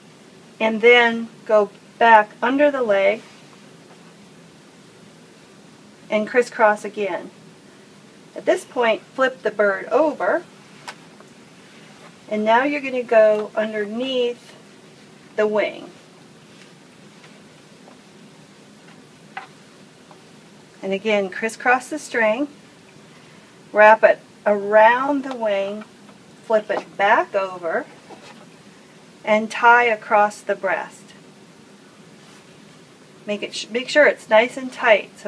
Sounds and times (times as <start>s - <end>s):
Speech: 0.6s - 3.3s, 6.1s - 7.3s, 8.4s - 10.5s, 12.3s - 14.6s, 15.4s - 16.0s, 20.8s - 22.6s, 23.8s - 25.9s, 26.5s - 28.0s, 29.3s - 31.2s, 33.3s - 35.2s.